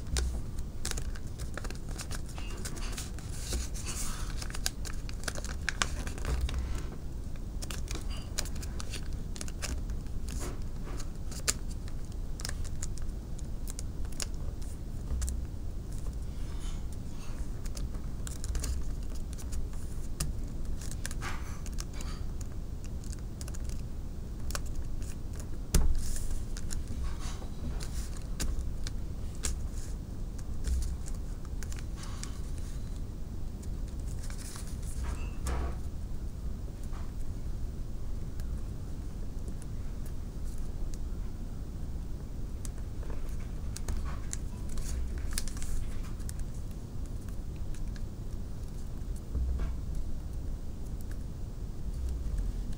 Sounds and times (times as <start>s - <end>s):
Inside, small room: 0.0s - 52.7s
Crumpling, crinkling: 0.1s - 35.4s, 42.6s - 49.7s.